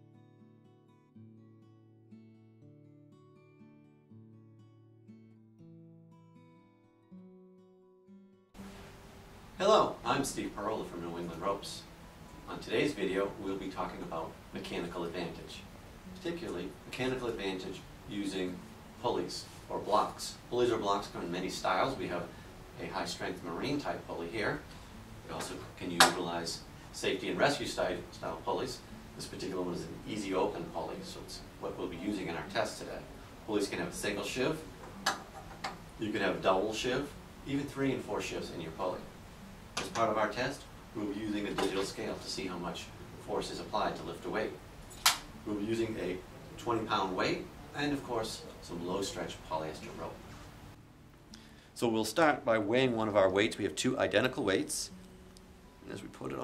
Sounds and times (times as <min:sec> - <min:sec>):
Speech: 0:09.6 - 0:34.7, 0:36.0 - 0:39.1, 0:39.8 - 0:44.6, 0:45.4 - 0:50.2, 0:51.8 - 0:54.9, 0:55.8 - 0:56.4.